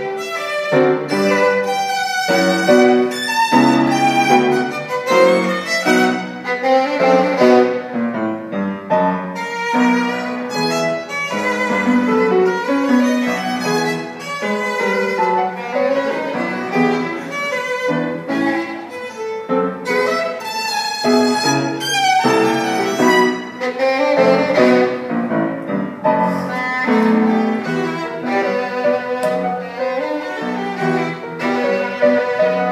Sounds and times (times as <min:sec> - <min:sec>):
Violin, fiddle: 0:00.0 - 0:08.6, 0:09.2 - 0:32.7.